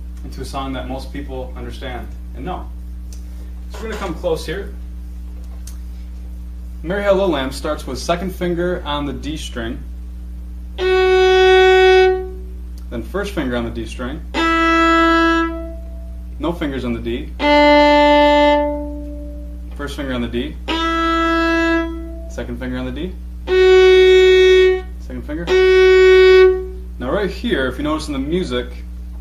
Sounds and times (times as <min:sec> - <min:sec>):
Speech: 0:00.2 - 0:02.8, 0:03.7 - 0:04.8, 0:06.8 - 0:09.9, 0:12.9 - 0:14.3, 0:16.4 - 0:17.4, 0:19.8 - 0:20.6, 0:22.3 - 0:23.2, 0:25.0 - 0:25.6, 0:27.0 - 0:28.9
Violin, fiddle: 0:14.4 - 0:15.8, 0:17.4 - 0:19.4, 0:20.7 - 0:22.4, 0:23.5 - 0:26.7.